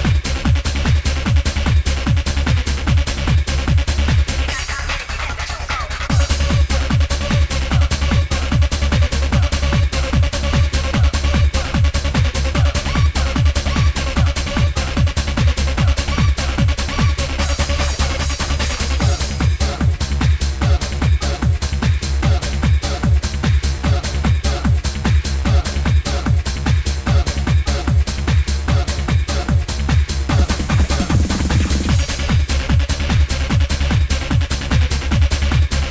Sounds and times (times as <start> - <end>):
Sampler: 6.1 - 20.0.